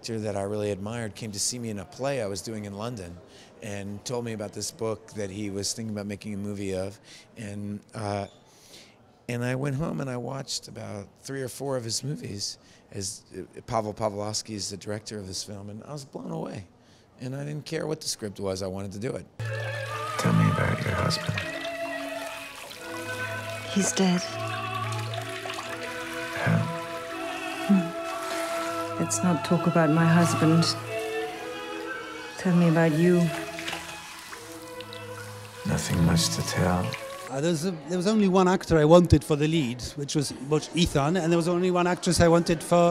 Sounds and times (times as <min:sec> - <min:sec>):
Bathtub (filling or washing): 0:19.4 - 0:37.3
Water: 0:19.4 - 0:37.4
Water tap, faucet: 0:19.5 - 0:29.6, 0:32.4 - 0:37.3
Sink (filling or washing): 0:19.6 - 0:29.6, 0:32.4 - 0:37.3.